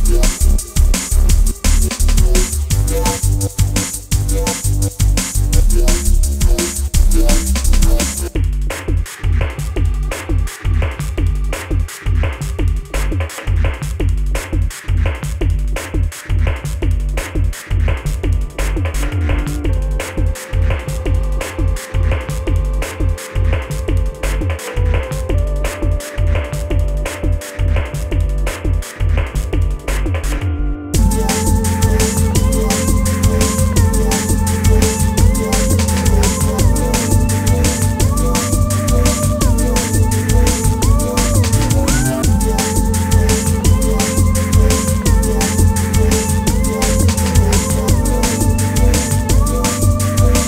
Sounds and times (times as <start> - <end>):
Music: 0.0 - 50.4.